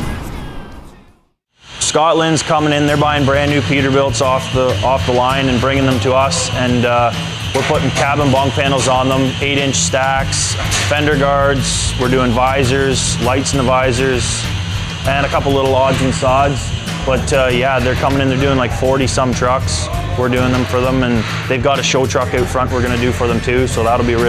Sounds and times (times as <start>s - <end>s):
Music: 1.7s - 24.2s
Speech: 1.8s - 14.4s, 15.1s - 24.2s.